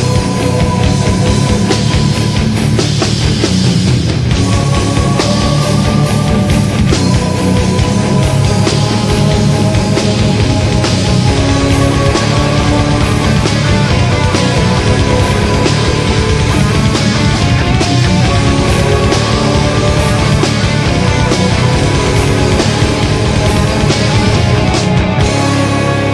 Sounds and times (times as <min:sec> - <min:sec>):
Music: 0:00.0 - 0:26.1.